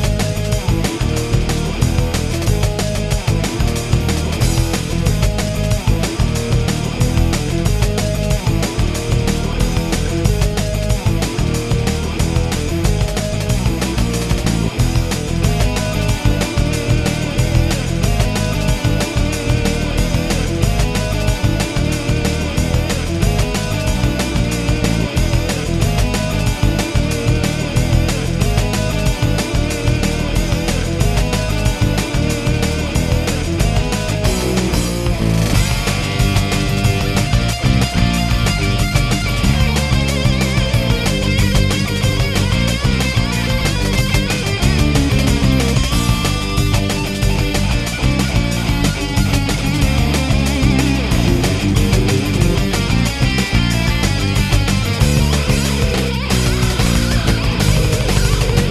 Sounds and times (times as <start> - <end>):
Music: 0.0 - 58.7.